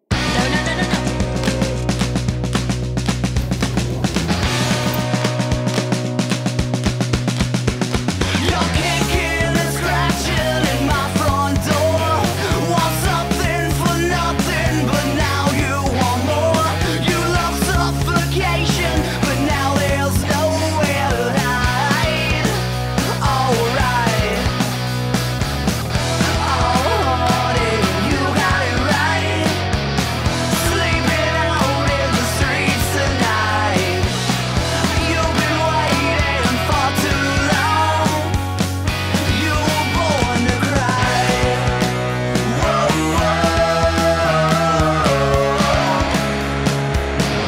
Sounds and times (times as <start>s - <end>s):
Dance music: 0.0s - 46.6s
Soundtrack music: 0.0s - 47.4s.